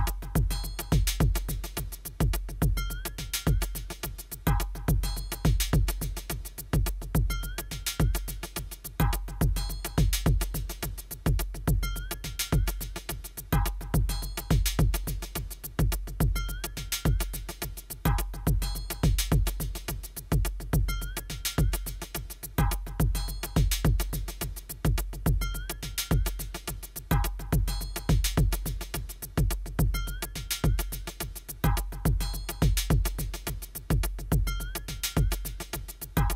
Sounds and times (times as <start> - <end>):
Drum machine: 0.0 - 36.3.